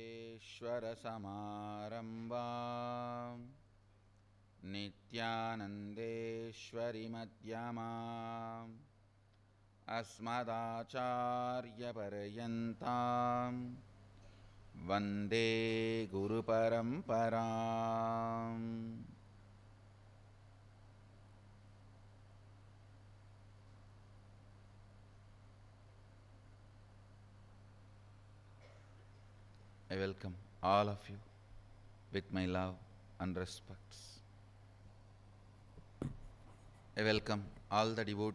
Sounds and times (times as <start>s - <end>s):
Mantra: 0.0s - 3.6s, 4.6s - 8.9s, 9.9s - 13.8s, 14.8s - 19.2s, 29.9s - 31.2s, 37.0s - 38.3s.